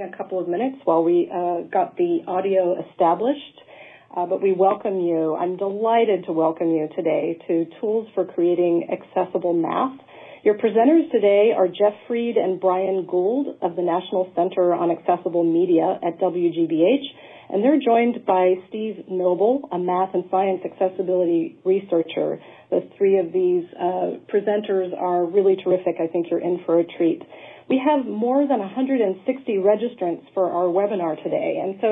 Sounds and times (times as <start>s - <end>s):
Speech: 0.0s - 31.9s.